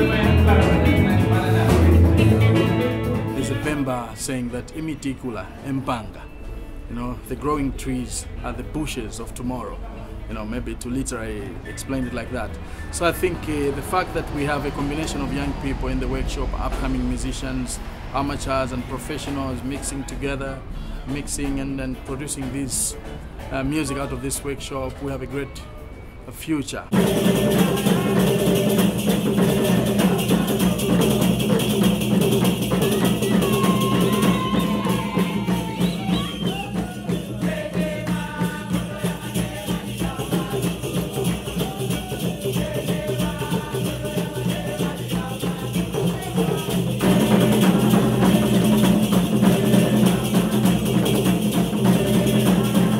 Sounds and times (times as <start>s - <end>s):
Music: 0.0s - 52.9s
Speech: 6.9s - 25.7s.